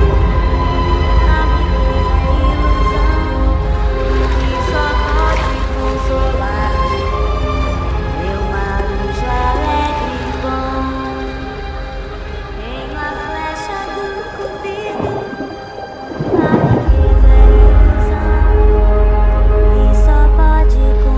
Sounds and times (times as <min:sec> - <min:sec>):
Music: 0:00.0 - 0:21.1.